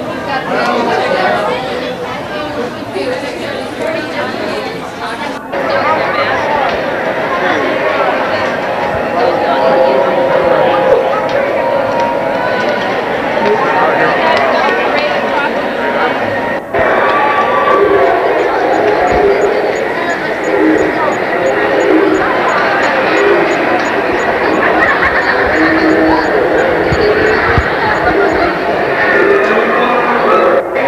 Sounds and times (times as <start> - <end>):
Speech: 0.0 - 30.8.